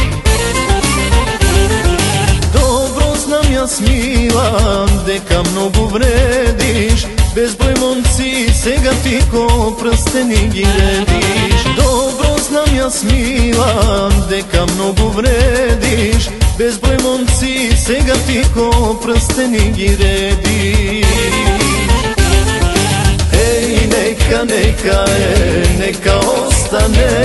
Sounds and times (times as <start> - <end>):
Music: 0.0 - 27.2.